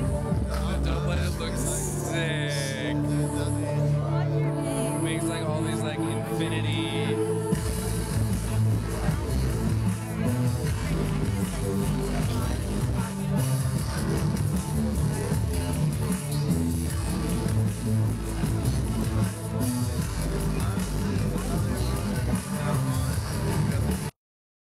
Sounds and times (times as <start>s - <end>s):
Music: 0.0s - 24.2s.